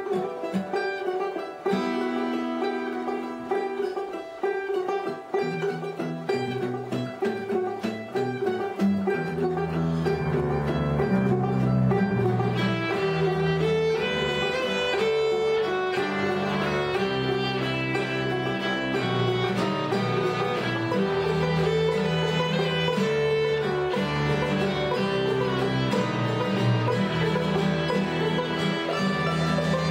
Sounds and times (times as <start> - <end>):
Bluegrass: 0.0 - 29.9
Classical music: 0.0 - 29.9
String section: 0.0 - 29.9
Violin, fiddle: 0.0 - 29.9.